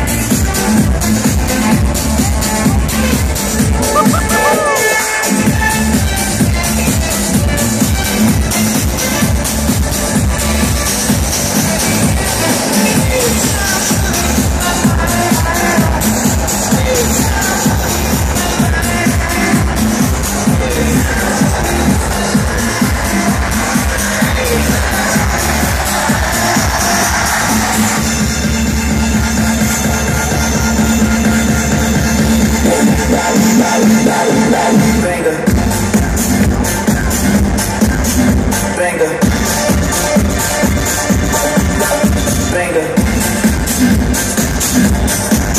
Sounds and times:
Music: 0.0 - 45.5.

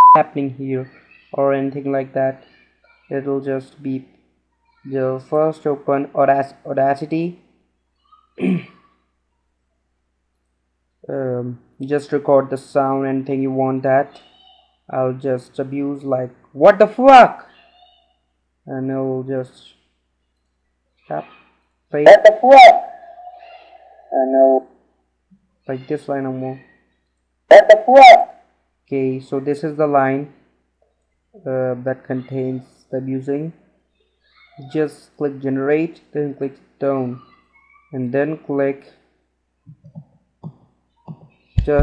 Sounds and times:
Speech: 0.2 - 4.1, 4.8 - 7.4, 11.1 - 18.1, 18.7 - 19.8, 21.1 - 24.6, 25.7 - 26.7, 27.5 - 28.3, 28.9 - 30.4, 31.4 - 33.6, 34.4 - 38.9, 41.1 - 41.8.

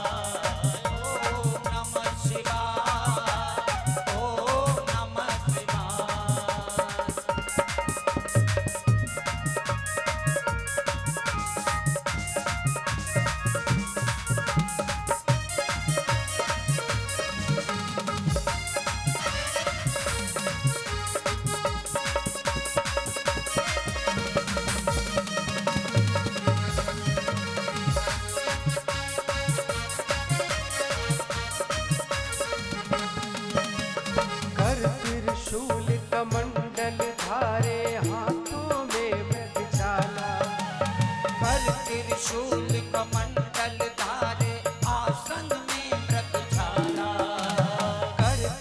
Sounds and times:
Music: 0.0 - 48.6.

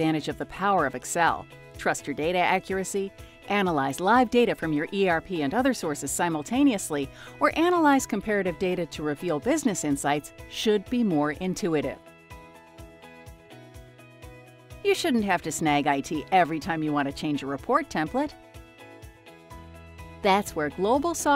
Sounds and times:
Speech: 0.0 - 12.0, 14.9 - 18.3, 20.3 - 21.3
Music: 0.0 - 21.3.

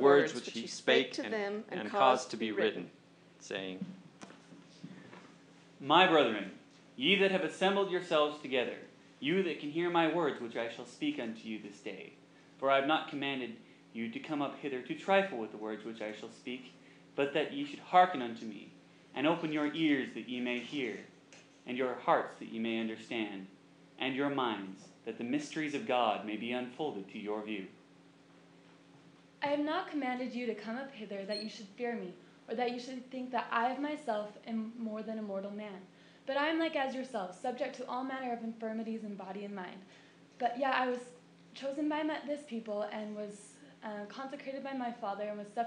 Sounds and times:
Female speech, woman speaking: 0.0 - 2.7, 29.4 - 45.6
Male speech, man speaking: 0.0 - 3.9, 5.8 - 21.1, 21.7 - 27.8
Narration, monologue: 0.0 - 45.6.

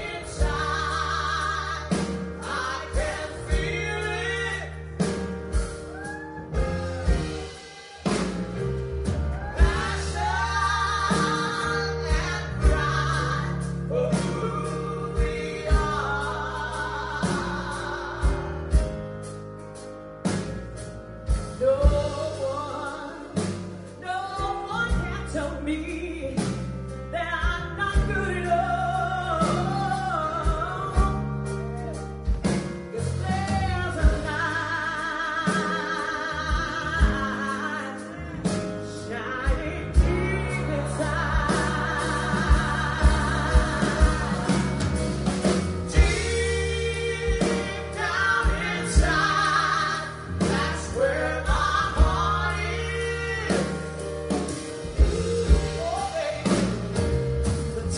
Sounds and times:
Inside, large room or hall: 0.0 - 57.9
Music: 0.0 - 57.9
Singing: 45.9 - 53.8.

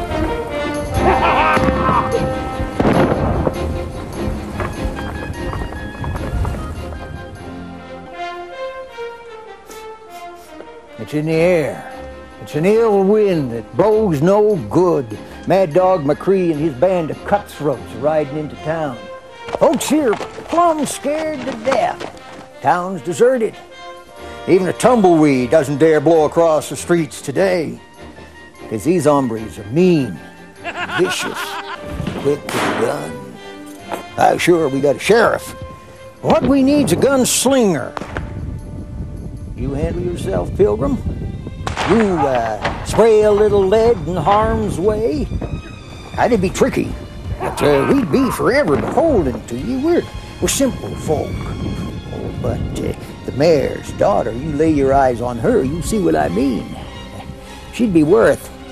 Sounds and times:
Music: 0.0 - 58.7.

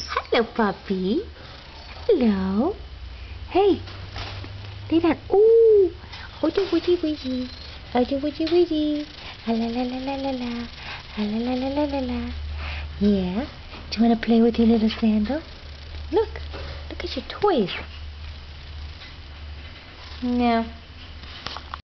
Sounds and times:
Speech: 2.1 - 2.8, 3.5 - 3.8, 4.9 - 12.4, 13.0 - 15.5, 16.1 - 17.9, 20.2 - 20.8.

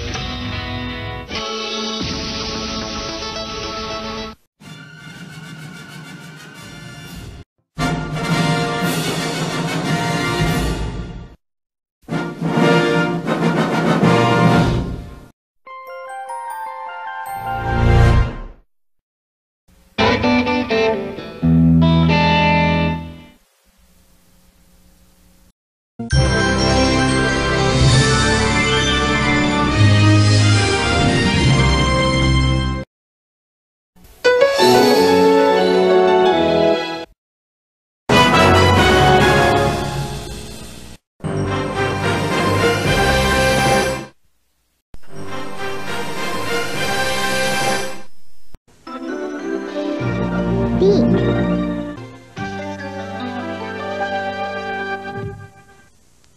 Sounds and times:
Music: 0.0 - 11.4, 12.1 - 18.7, 20.0 - 23.4, 26.0 - 32.9, 34.0 - 37.2, 38.1 - 44.2, 45.0 - 56.0.

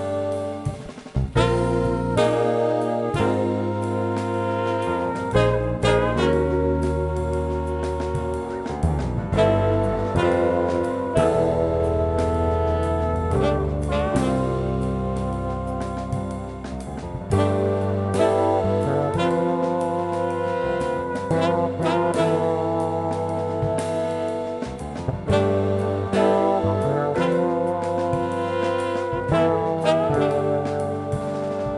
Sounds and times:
Jazz: 0.0 - 31.7.

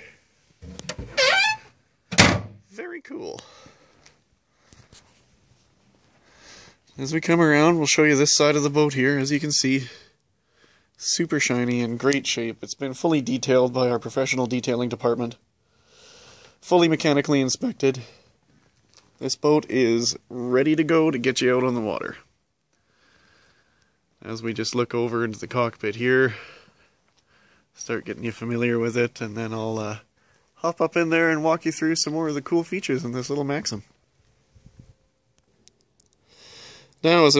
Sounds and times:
Door: 0.6 - 2.6
Speech: 2.7 - 3.5, 7.0 - 10.1, 11.0 - 15.4, 16.6 - 18.3, 19.2 - 22.3, 24.2 - 26.6, 27.8 - 33.9, 37.0 - 37.3.

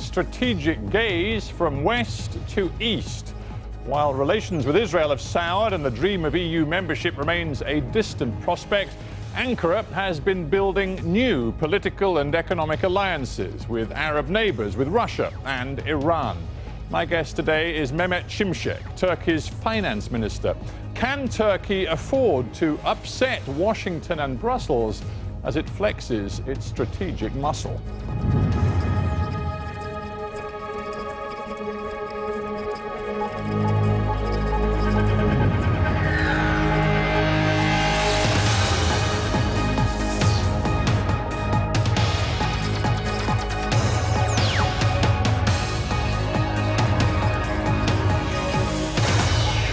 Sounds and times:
Speech: 0.0 - 3.3, 3.9 - 27.8
Music: 0.0 - 49.7.

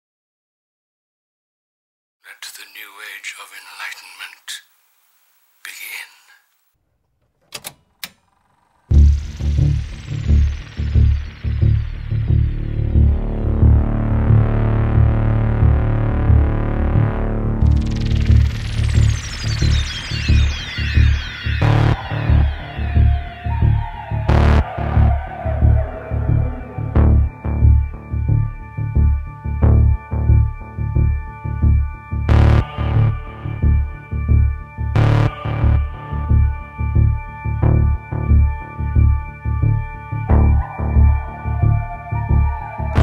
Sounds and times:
Speech: 2.2 - 4.7
Music: 8.9 - 43.0.

